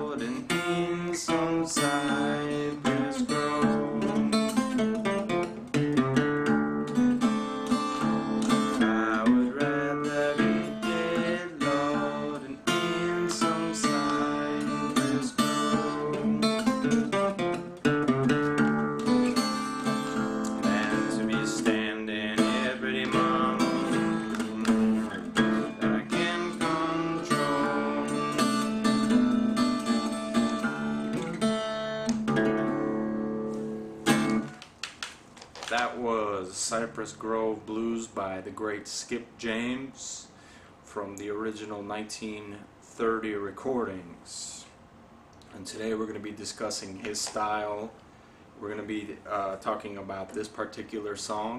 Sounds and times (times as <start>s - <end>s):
Strum: 0.0s - 34.7s
Blues: 0.0s - 38.2s.